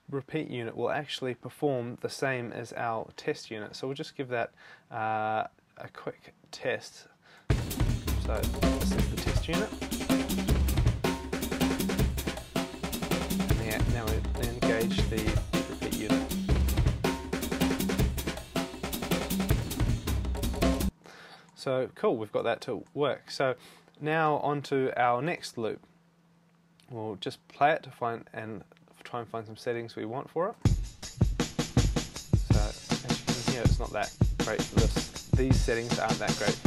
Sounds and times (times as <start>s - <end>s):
Inside, small room: 0.0s - 36.6s
Speech: 0.1s - 7.1s, 8.2s - 9.7s, 13.5s - 16.3s, 21.6s - 25.8s, 26.8s - 30.6s, 32.4s - 36.6s
Snare drum: 7.5s - 20.9s, 30.7s - 36.6s.